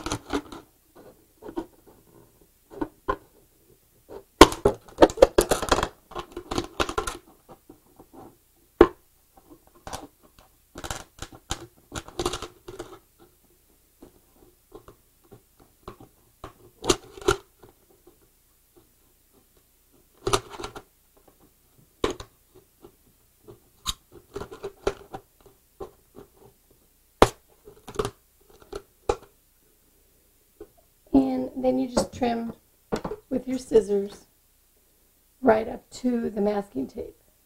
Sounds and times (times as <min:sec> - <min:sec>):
Inside, small room: 0:00.0 - 0:37.4.